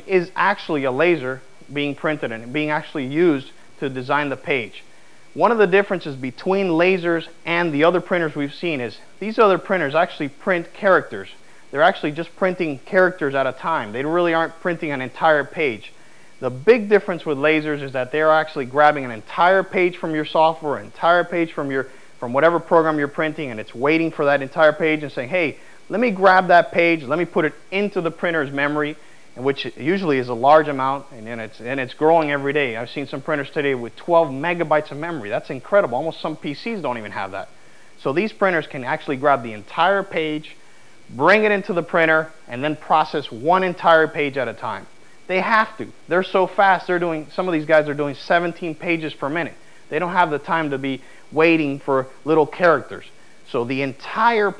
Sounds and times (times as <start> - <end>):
Speech: 0.0 - 54.5.